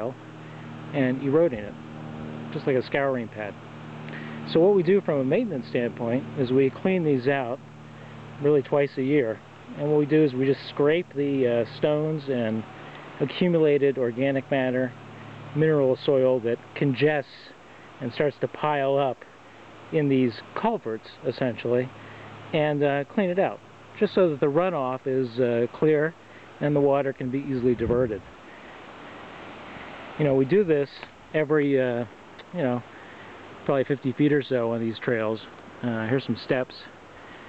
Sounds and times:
Speech: 0.0 - 0.2, 0.9 - 1.8, 2.5 - 3.6, 4.2 - 7.6, 8.4 - 19.3, 19.9 - 28.3, 30.2 - 32.9, 33.6 - 37.0
Outside, rural or natural: 0.0 - 37.4.

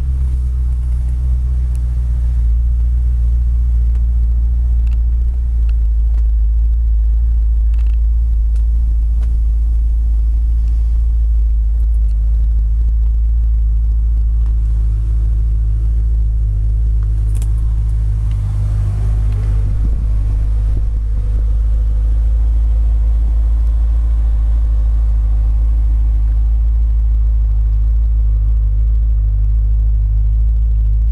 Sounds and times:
Car: 0.0 - 31.1.

